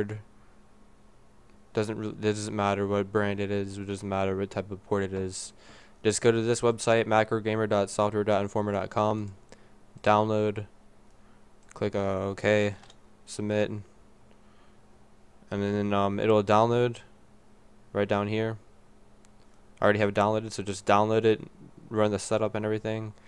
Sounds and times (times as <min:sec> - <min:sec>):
Speech: 0:00.0 - 0:00.3, 0:01.7 - 0:09.4, 0:10.0 - 0:10.7, 0:11.7 - 0:13.9, 0:15.5 - 0:17.1, 0:17.9 - 0:18.6, 0:19.8 - 0:23.2.